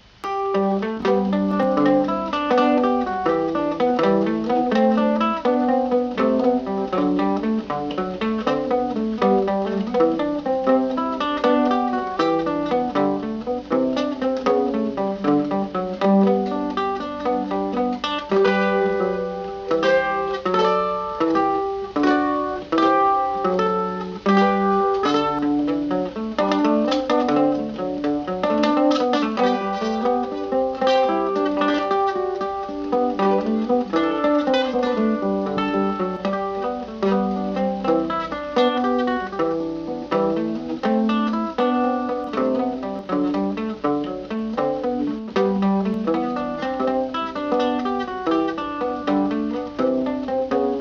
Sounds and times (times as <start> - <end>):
Guitar: 0.0 - 50.8
Mandolin: 0.0 - 50.8.